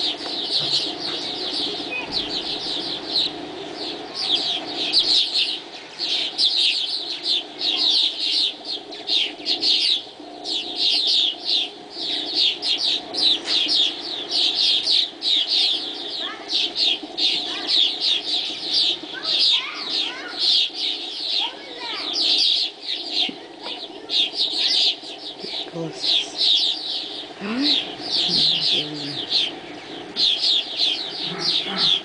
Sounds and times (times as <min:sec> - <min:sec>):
Bird: 0:00.0 - 0:32.0
Speech: 0:23.2 - 0:26.4, 0:27.4 - 0:29.3.